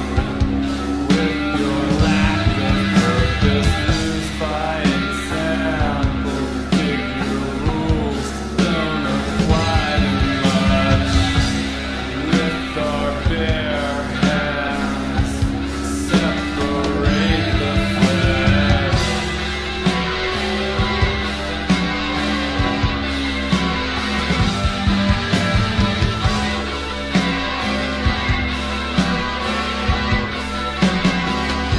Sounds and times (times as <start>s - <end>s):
Punk rock: 0.0s - 31.7s.